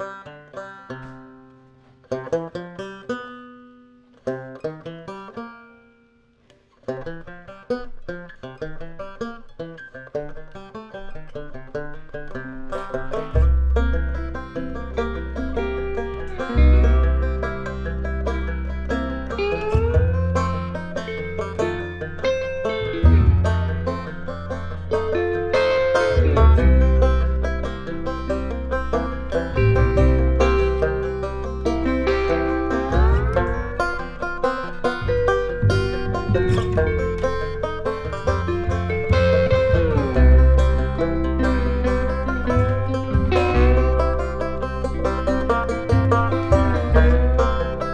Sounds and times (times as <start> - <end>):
Guitar: 0.0 - 47.9.